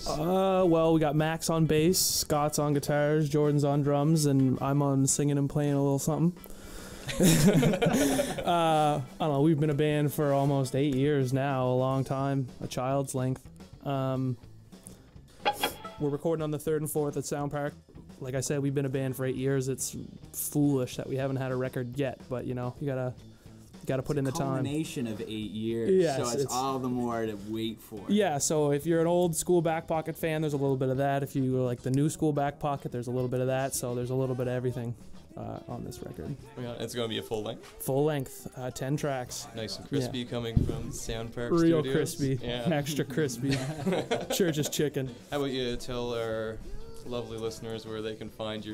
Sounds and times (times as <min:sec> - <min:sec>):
Speech: 0:00.0 - 0:06.4, 0:08.5 - 0:14.4, 0:16.0 - 0:23.2, 0:23.9 - 0:43.7, 0:44.4 - 0:48.7.